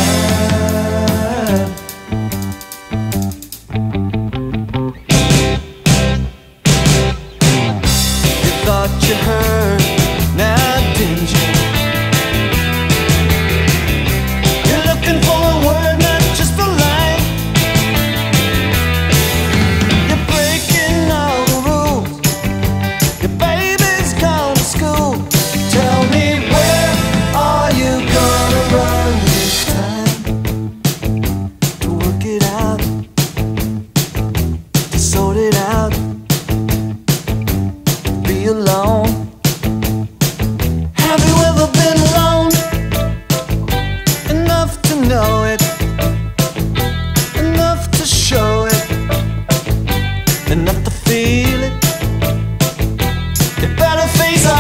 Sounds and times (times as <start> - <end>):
Music: 0.0 - 54.6.